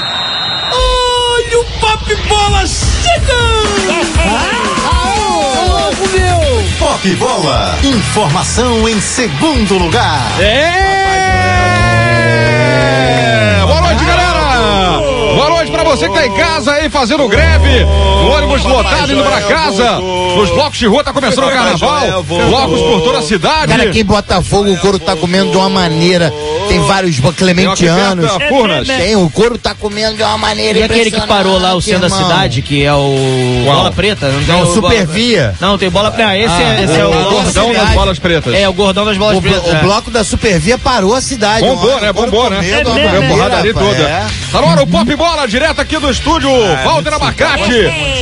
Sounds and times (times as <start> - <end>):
Music: 0.0 - 48.2
Speech: 1.2 - 11.6, 13.6 - 48.2.